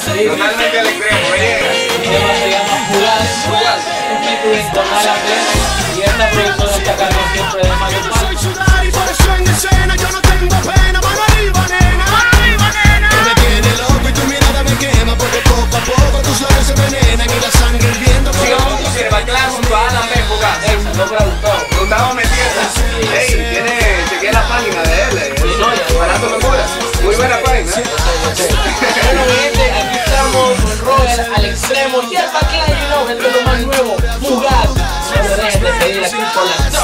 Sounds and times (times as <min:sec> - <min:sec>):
Speech: 0:00.0 - 0:08.6, 0:18.0 - 0:36.8
Soundtrack music: 0:00.0 - 0:36.8.